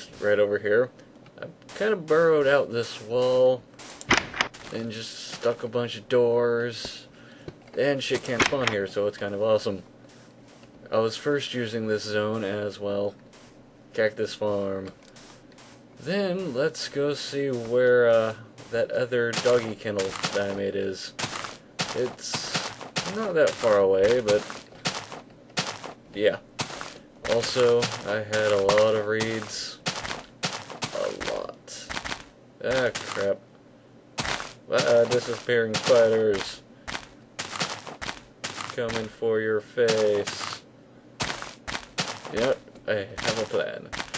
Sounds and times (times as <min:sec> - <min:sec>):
Speech: 0:00.0 - 0:03.6, 0:04.7 - 0:07.1, 0:07.8 - 0:09.8, 0:10.8 - 0:13.2, 0:14.0 - 0:15.0, 0:16.0 - 0:21.2, 0:21.9 - 0:24.5, 0:26.2 - 0:26.4, 0:27.3 - 0:29.8, 0:30.9 - 0:31.9, 0:32.6 - 0:33.4, 0:34.7 - 0:36.6, 0:38.7 - 0:40.6, 0:42.3 - 0:43.9.